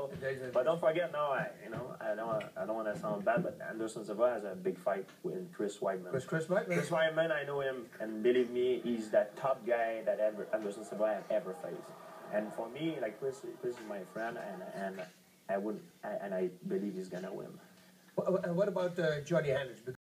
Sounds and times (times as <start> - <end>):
Speech: 0.0 - 20.0.